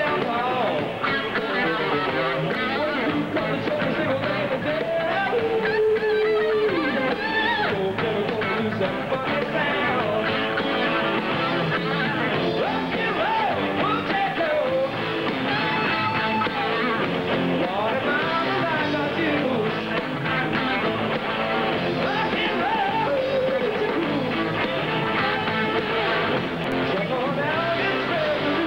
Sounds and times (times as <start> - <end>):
Electric guitar: 0.0 - 28.6.